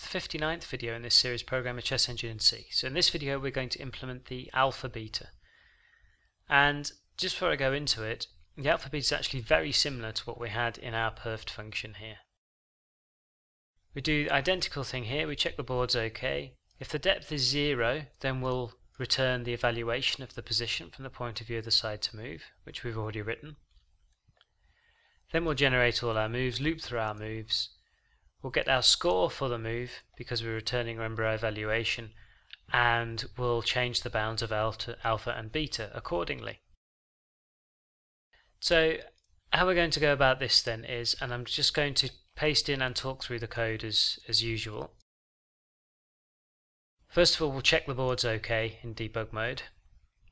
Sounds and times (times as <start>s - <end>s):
Speech: 0.0s - 5.4s, 6.5s - 12.3s, 13.9s - 23.6s, 25.3s - 27.8s, 28.4s - 36.7s, 38.6s - 45.0s, 47.1s - 49.8s.